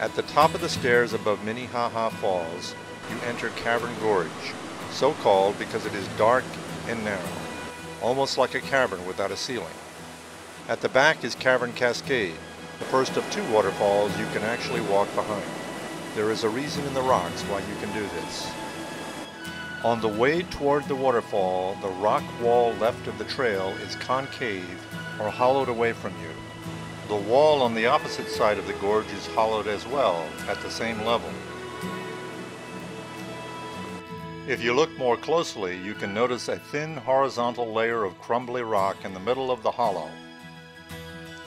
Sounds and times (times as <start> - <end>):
Speech: 0.0 - 7.3, 8.0 - 9.8, 10.7 - 15.5, 16.2 - 18.6, 19.8 - 26.4, 27.1 - 31.4, 34.5 - 40.2
Waterfall: 0.0 - 37.6
Music: 0.0 - 41.4.